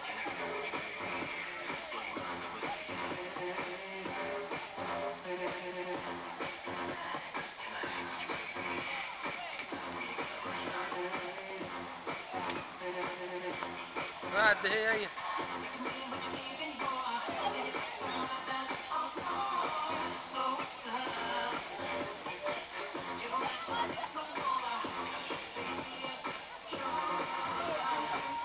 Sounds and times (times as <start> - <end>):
Music: 0.0 - 28.4.